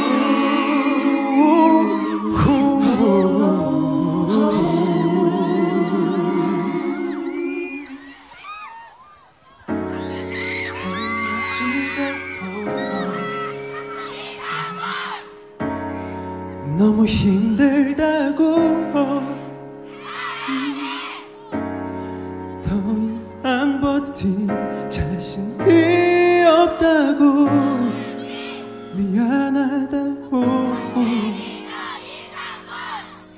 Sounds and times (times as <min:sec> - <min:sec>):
Music: 0:00.0 - 0:08.1, 0:09.6 - 0:33.3.